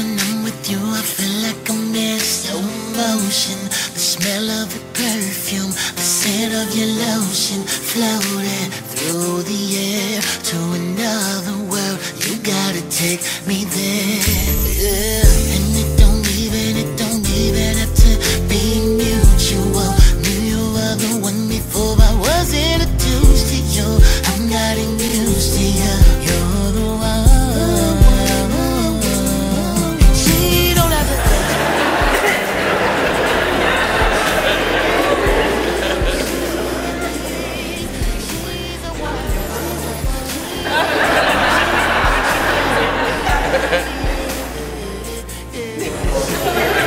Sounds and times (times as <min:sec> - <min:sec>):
Rhythm and blues: 0:00.0 - 0:46.8.